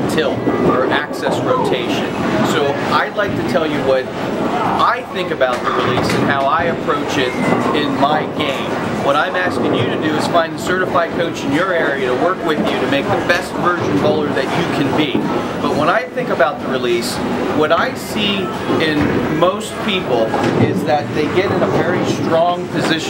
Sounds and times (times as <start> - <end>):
Speech: 0.0 - 23.1.